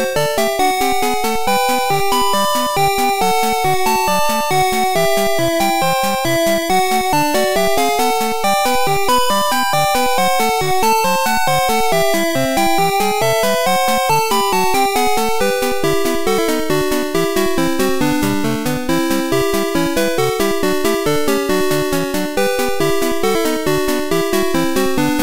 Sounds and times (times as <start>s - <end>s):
Music: 0.0s - 25.2s.